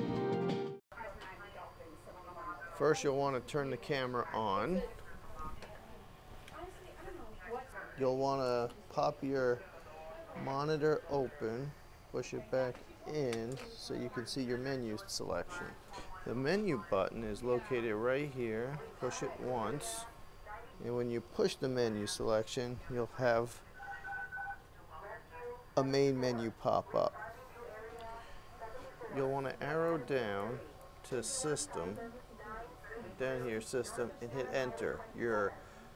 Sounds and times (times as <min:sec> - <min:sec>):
Speech: 0:00.9 - 0:24.2, 0:24.8 - 0:35.9.